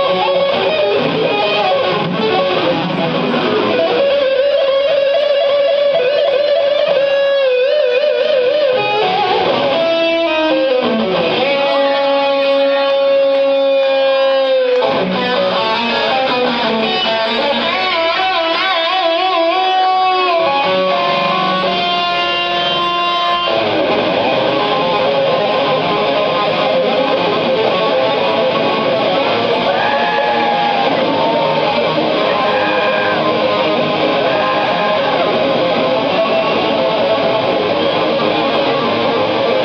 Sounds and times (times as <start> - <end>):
Guitar: 0.0 - 39.6.